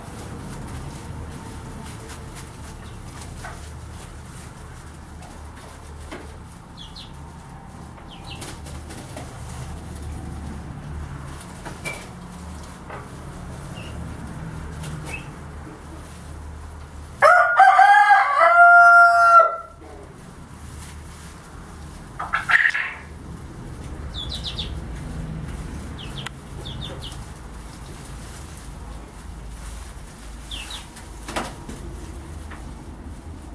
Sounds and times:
Bird: 8.1s - 8.6s, 15.0s - 15.4s, 24.1s - 24.8s, 26.0s - 27.2s, 30.5s - 31.0s
Chicken, rooster: 17.2s - 20.2s, 21.8s - 23.2s.

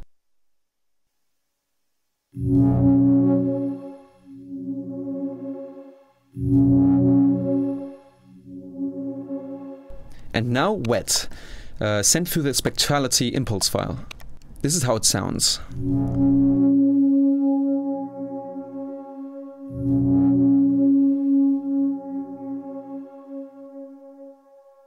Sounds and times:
Music: 2.4s - 10.4s, 15.7s - 24.8s
Speech: 10.4s - 15.7s.

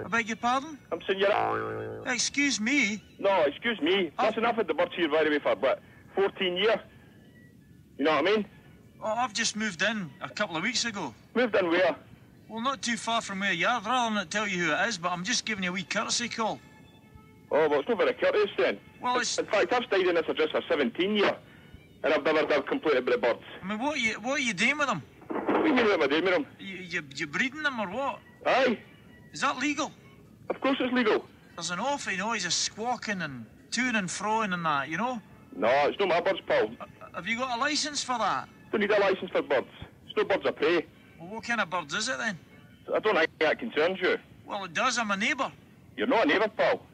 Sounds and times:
Speech: 2.1s - 6.9s, 8.0s - 16.6s, 17.5s - 21.4s, 22.0s - 25.0s, 30.5s - 46.9s.

